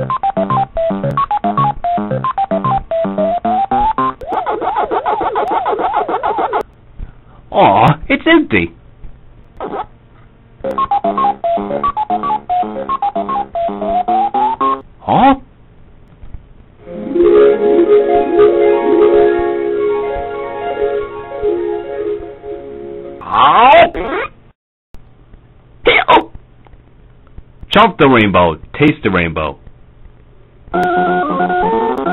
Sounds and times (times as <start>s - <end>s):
Music: 0.0s - 4.3s, 10.6s - 14.8s, 16.8s - 23.2s, 30.8s - 32.1s
Speech: 7.5s - 8.8s, 15.0s - 15.5s, 27.7s - 29.6s.